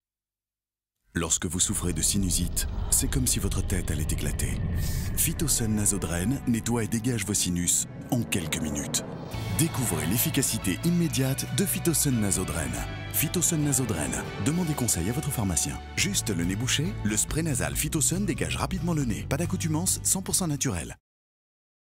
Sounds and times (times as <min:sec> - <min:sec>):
Speech: 0:01.2 - 0:21.0
Music: 0:05.3 - 0:21.0.